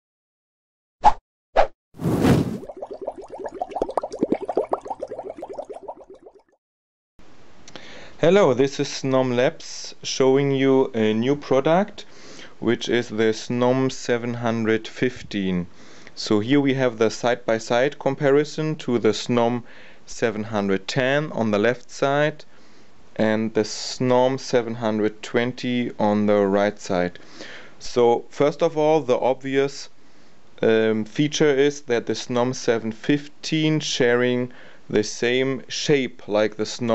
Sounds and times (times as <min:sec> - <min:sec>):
Speech: 0:08.2 - 0:22.5, 0:23.2 - 0:27.2, 0:27.8 - 0:29.9, 0:30.6 - 0:36.9.